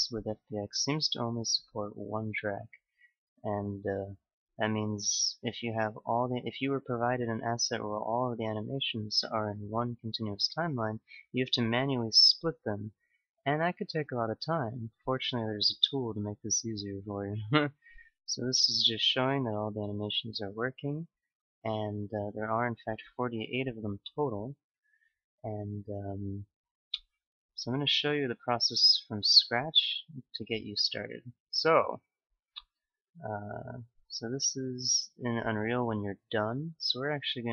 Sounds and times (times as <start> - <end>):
Speech: 0.0 - 2.8, 3.4 - 21.1, 21.7 - 24.6, 25.5 - 26.5, 27.6 - 32.0, 33.2 - 37.5.